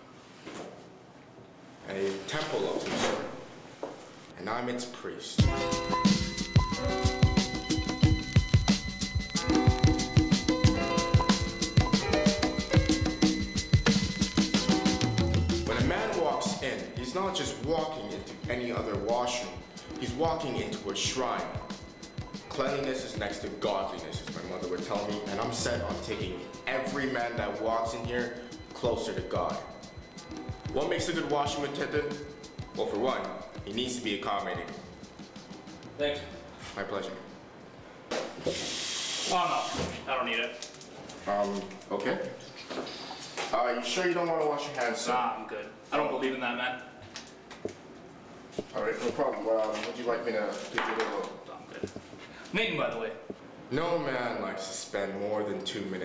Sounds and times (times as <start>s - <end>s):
Speech: 1.8s - 3.4s, 4.4s - 5.5s, 15.7s - 21.6s, 22.5s - 29.7s, 30.7s - 32.2s, 32.8s - 34.8s, 36.0s - 37.3s, 39.3s - 40.6s, 41.3s - 42.4s, 43.5s - 46.9s, 48.7s - 51.9s, 52.5s - 56.0s
Music: 5.4s - 37.5s.